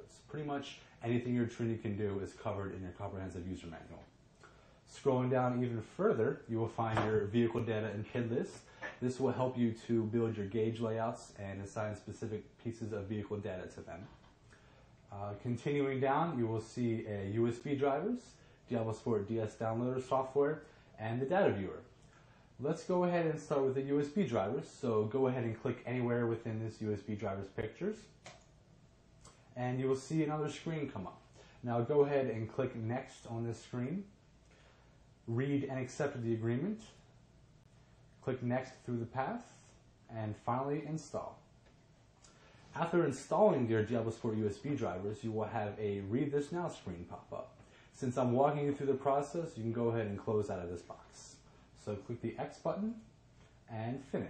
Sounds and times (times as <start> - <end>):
Speech: 0.0 - 4.2, 4.9 - 14.2, 15.1 - 22.0, 22.6 - 28.3, 29.6 - 34.2, 35.2 - 37.1, 38.2 - 41.5, 42.7 - 53.1, 53.7 - 54.3
Inside, small room: 0.0 - 54.3.